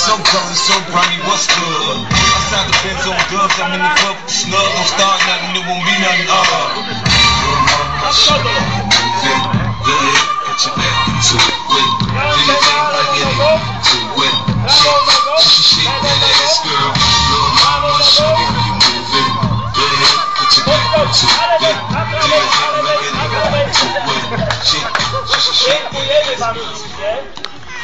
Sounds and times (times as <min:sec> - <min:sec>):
Music: 0:00.0 - 0:27.3.